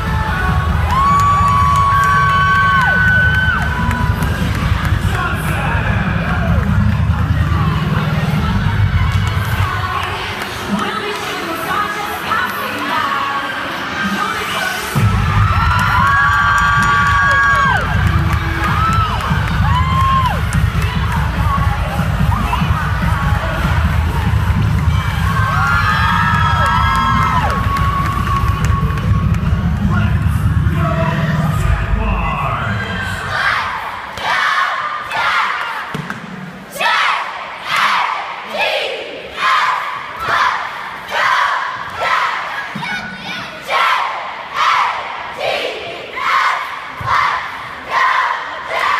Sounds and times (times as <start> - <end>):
Music: 0.0 - 33.4
Cheering: 0.0 - 36.0.